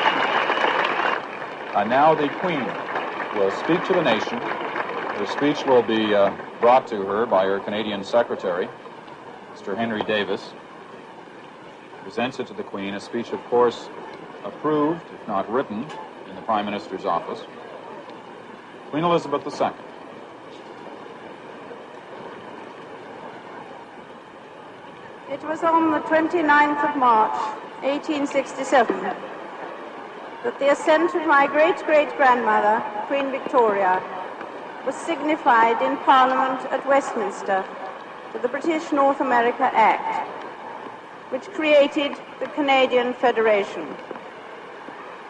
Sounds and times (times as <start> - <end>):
Narration, monologue: 1.4 - 20.5, 25.2 - 44.3
Female speech, woman speaking: 25.3 - 29.2, 30.5 - 34.1, 34.9 - 37.7, 38.4 - 40.2, 41.3 - 44.0.